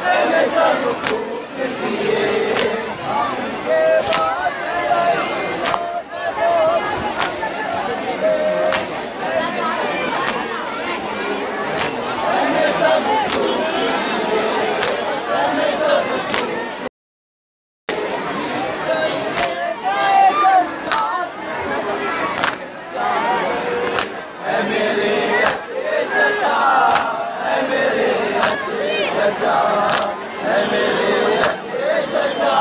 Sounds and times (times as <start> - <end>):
Speech: 0.0 - 16.9, 17.9 - 32.6.